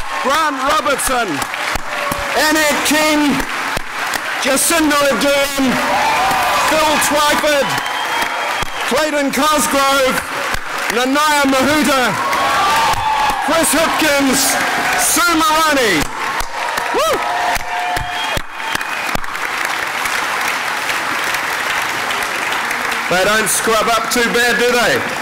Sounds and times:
Male speech, man speaking: 0.2 - 1.4, 2.4 - 3.4, 4.4 - 5.8, 6.6 - 7.8, 8.9 - 10.2, 10.9 - 12.2, 13.5 - 16.0, 23.1 - 25.1.

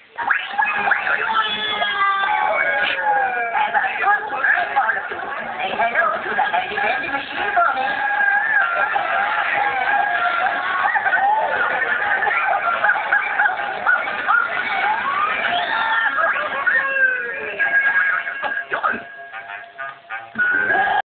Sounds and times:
Speech: 0.2 - 12.6.

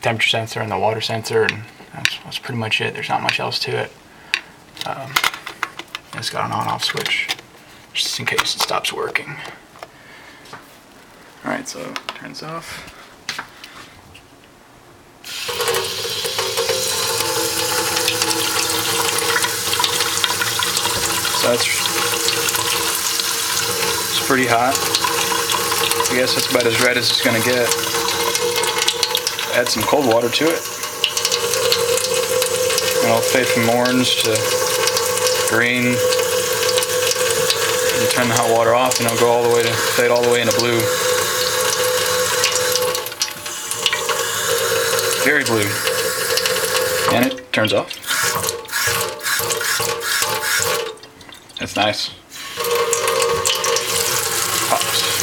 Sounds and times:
Water tap, faucet: 15.3 - 51.4, 52.3 - 55.2
Sink (filling or washing): 15.3 - 55.2
Water: 15.6 - 55.2.

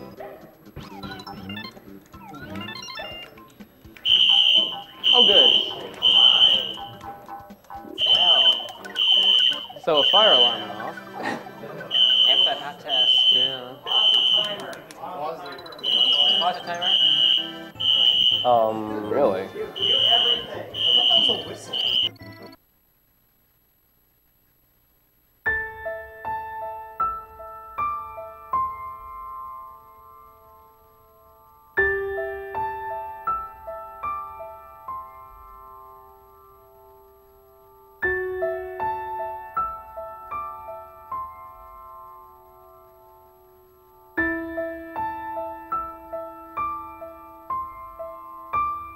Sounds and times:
Music: 0.0 - 22.6, 25.4 - 48.9.

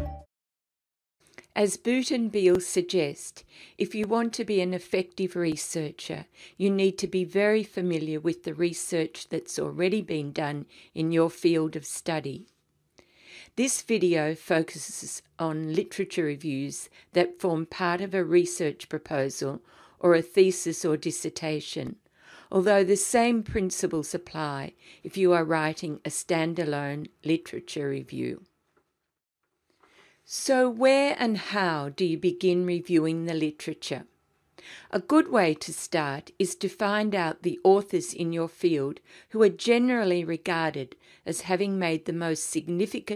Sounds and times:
Speech: 1.6 - 12.5, 13.6 - 28.4, 30.3 - 34.1, 34.9 - 43.1.

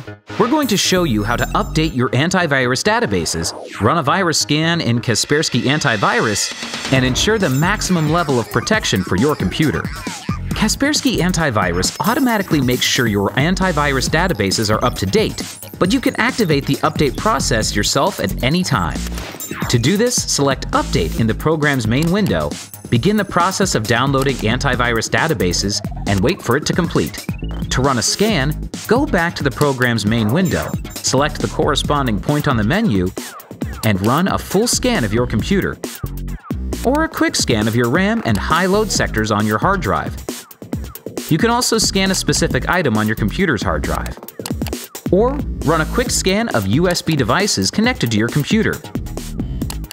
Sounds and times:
Music: 0.0 - 49.9
Speech: 0.4 - 33.2, 33.8 - 35.8, 36.8 - 40.2, 41.3 - 44.2, 45.1 - 48.8.

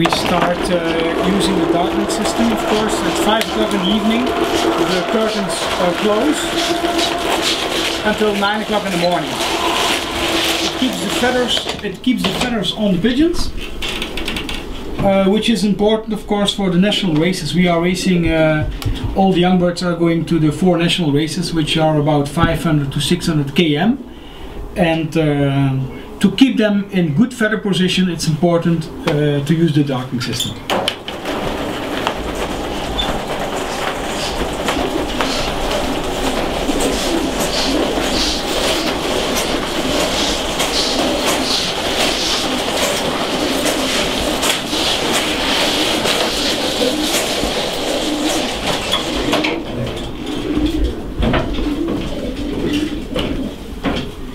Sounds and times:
Speech: 0.0 - 6.6, 8.0 - 9.4, 10.8 - 13.6, 15.0 - 24.0, 24.8 - 30.6.

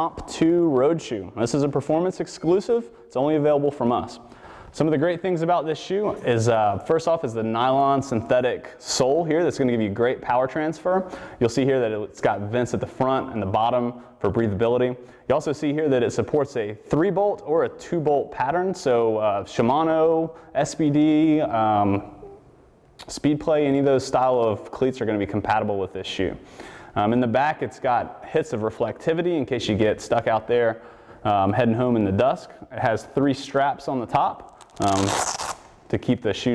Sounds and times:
Speech: 0.0 - 22.4, 23.0 - 26.4, 27.0 - 35.2, 35.9 - 36.5.

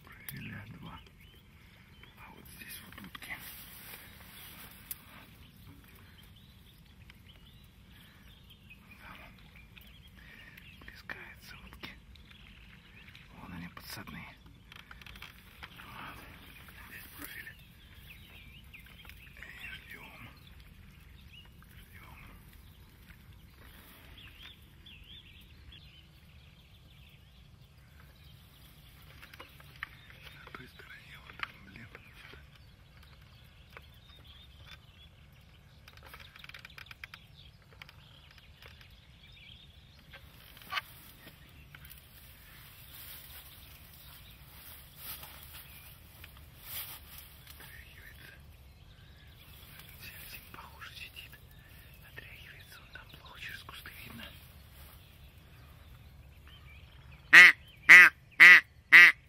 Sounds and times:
Bird: 0.0 - 59.2.

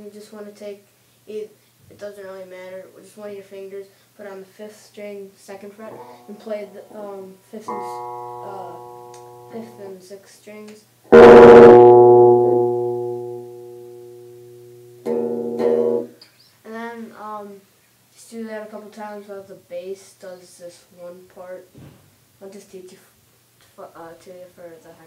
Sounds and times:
Speech: 0.0 - 8.8, 9.5 - 10.9, 16.6 - 21.8, 22.4 - 25.0
Music: 5.9 - 7.0, 7.7 - 9.9, 11.1 - 16.1.

